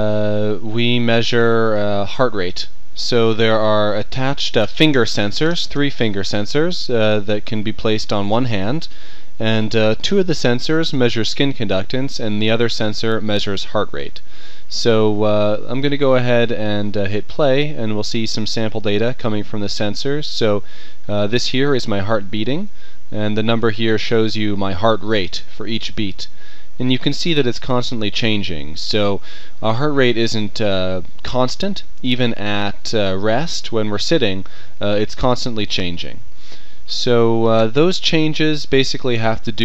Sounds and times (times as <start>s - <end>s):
Speech: 0.0s - 36.2s, 36.9s - 39.6s.